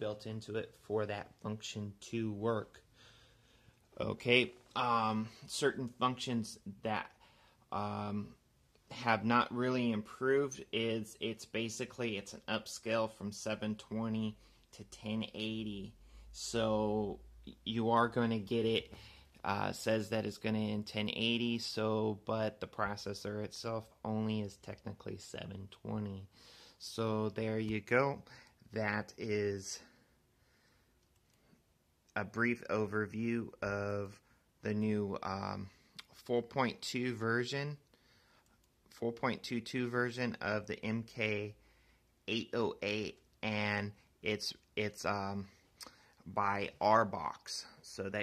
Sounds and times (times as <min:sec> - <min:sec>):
Speech: 0:00.0 - 0:02.8, 0:04.0 - 0:30.0, 0:32.1 - 0:37.8, 0:38.9 - 0:41.6, 0:42.3 - 0:45.6, 0:46.2 - 0:48.2.